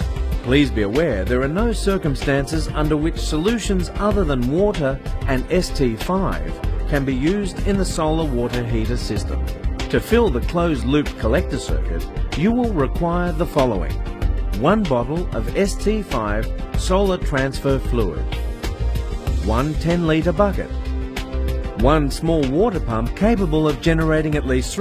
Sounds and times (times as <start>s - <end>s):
Music: 0.0s - 24.8s
Speech: 0.5s - 14.0s, 14.6s - 18.2s, 19.4s - 20.7s, 21.8s - 24.8s.